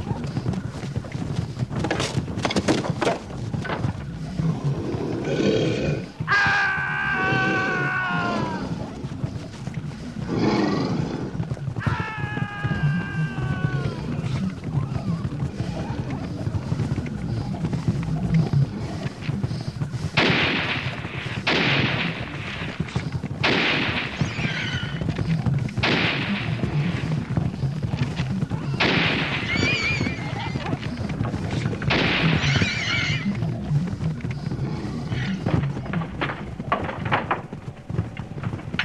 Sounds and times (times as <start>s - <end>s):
Animal: 0.0s - 23.2s, 23.9s - 38.8s
Gunshot, gunfire: 20.2s - 22.3s, 23.4s - 24.8s, 25.8s - 27.0s, 28.8s - 29.9s, 31.9s - 32.7s.